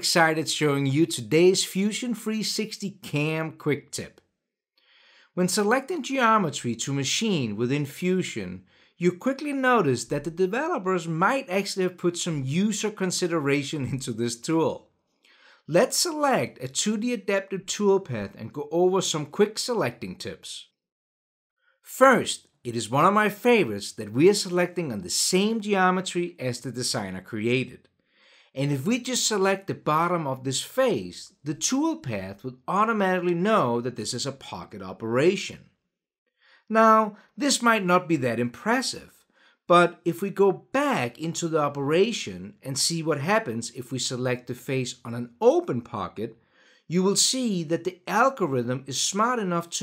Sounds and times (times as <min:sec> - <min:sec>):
Speech: 0:00.0 - 0:04.2, 0:05.4 - 0:14.9, 0:15.7 - 0:20.8, 0:21.9 - 0:27.8, 0:28.6 - 0:35.7, 0:36.7 - 0:49.8.